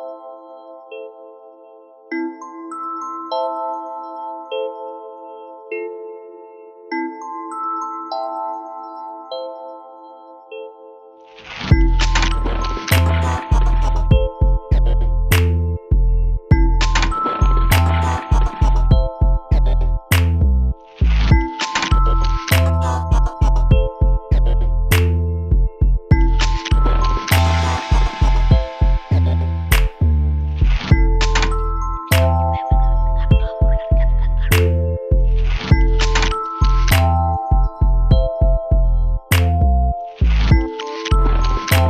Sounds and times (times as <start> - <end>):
Music: 0.0 - 41.9.